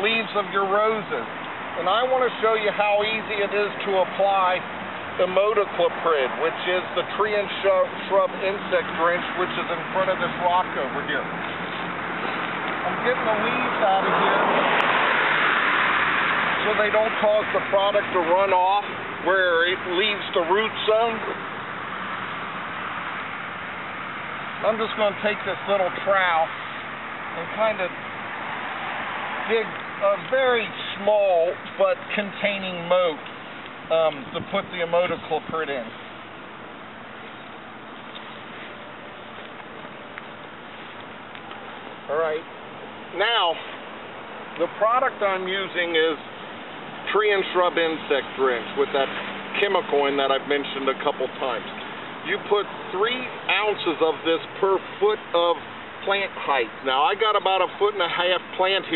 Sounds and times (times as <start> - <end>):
Speech: 0.0 - 4.6, 5.2 - 11.4, 12.8 - 14.5, 16.6 - 21.4, 24.6 - 26.5, 27.4 - 28.0, 29.5 - 33.2, 33.9 - 36.0, 42.1 - 42.5, 43.1 - 43.7, 44.6 - 46.2, 47.1 - 58.9.